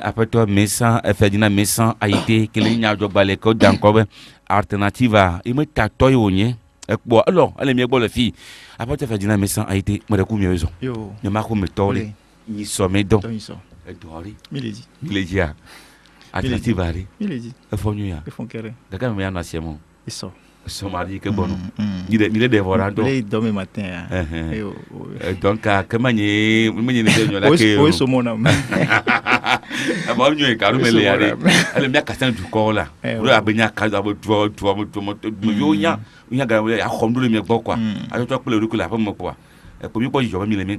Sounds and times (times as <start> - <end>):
Speech: 0.0 - 15.6, 16.4 - 28.5, 30.0 - 40.7.